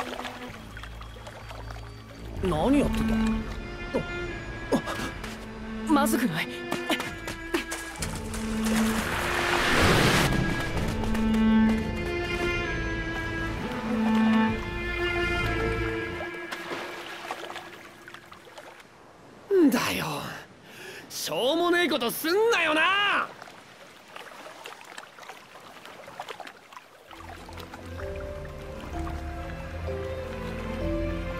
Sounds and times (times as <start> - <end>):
Speech: 21.1 - 23.3.